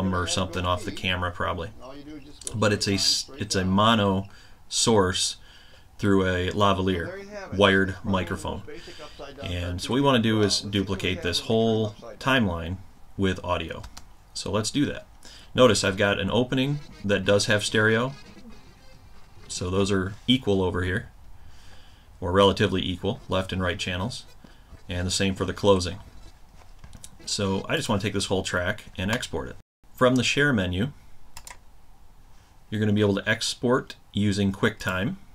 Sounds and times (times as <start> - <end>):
Speech: 0.0 - 5.4, 6.0 - 18.4, 19.5 - 21.1, 22.2 - 26.1, 27.1 - 31.0, 32.7 - 35.2.